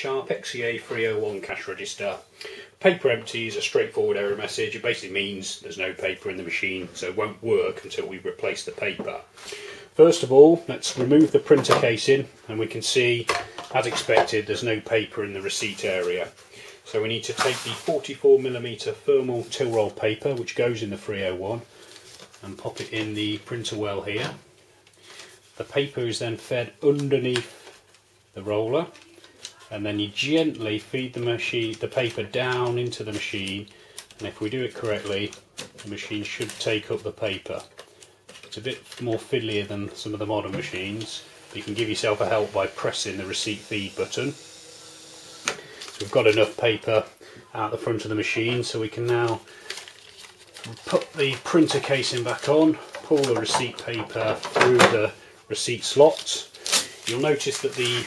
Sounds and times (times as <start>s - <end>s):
Speech: 0.0s - 9.3s, 10.0s - 21.7s, 22.4s - 24.4s, 25.6s - 27.6s, 28.4s - 37.7s, 38.5s - 44.4s, 46.0s - 49.5s, 50.7s - 56.5s, 57.1s - 58.0s.